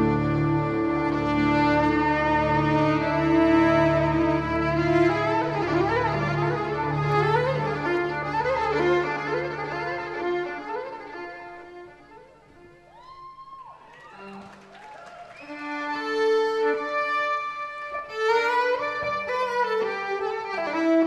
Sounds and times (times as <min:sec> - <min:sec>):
Violin, fiddle: 0:00.0 - 0:13.2, 0:15.4 - 0:21.0.